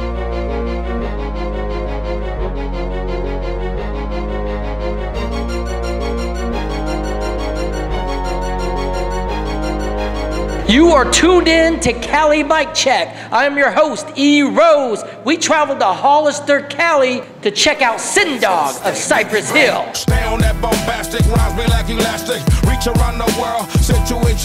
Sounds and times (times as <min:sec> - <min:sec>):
Music: 0:00.0 - 0:13.4, 0:18.2 - 0:24.4
Speech: 0:10.7 - 0:20.1.